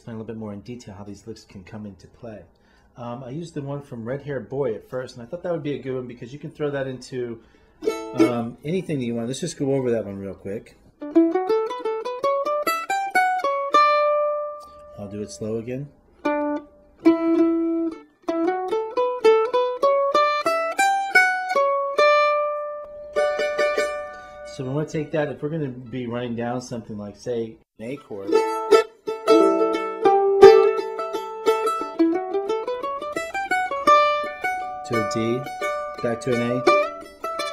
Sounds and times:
Speech: 0.0s - 7.4s, 8.2s - 10.8s, 14.9s - 16.0s, 24.5s - 28.4s, 34.8s - 36.8s
Mandolin: 6.7s - 26.2s, 27.8s - 37.5s.

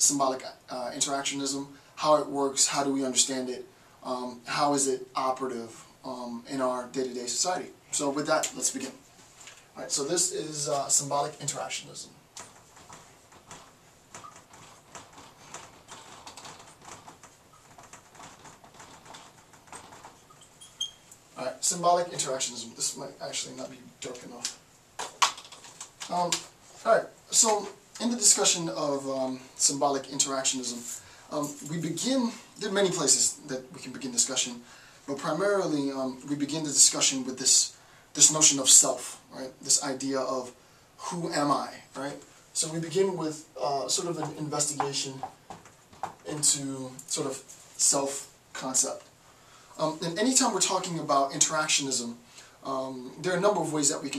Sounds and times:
Speech: 0.0s - 9.0s, 9.8s - 12.2s, 21.4s - 24.6s, 26.1s - 45.4s, 46.2s - 49.1s, 49.8s - 54.1s.

